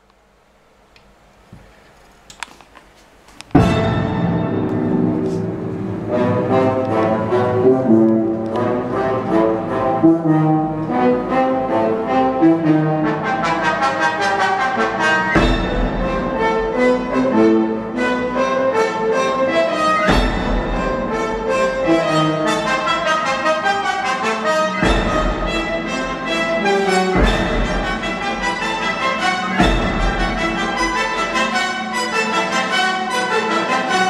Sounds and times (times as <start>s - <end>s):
French horn: 3.6s - 34.0s.